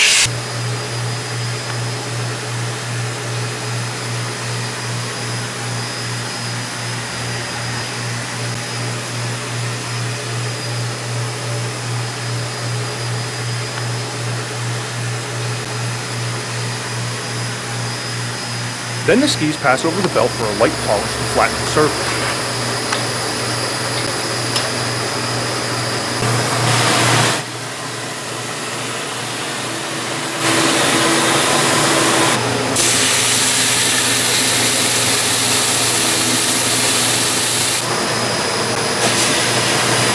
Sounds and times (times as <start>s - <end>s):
Speech: 19.0s - 22.5s.